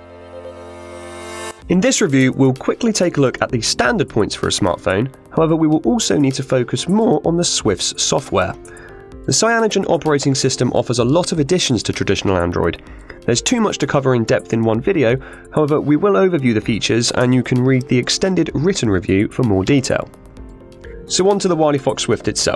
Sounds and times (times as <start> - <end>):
Music: 0.0 - 22.5
Speech: 1.7 - 8.6, 9.3 - 20.1, 21.1 - 22.5.